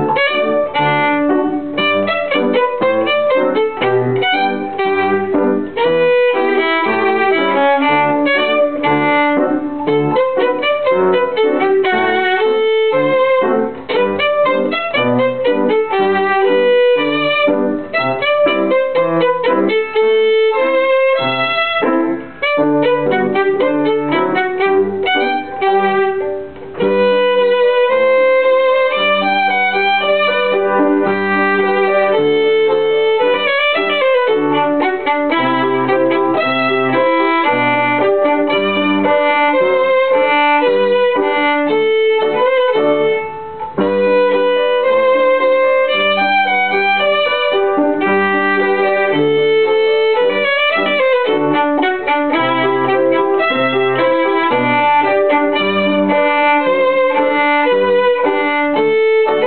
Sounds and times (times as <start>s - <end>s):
Violin, fiddle: 0.0s - 59.4s.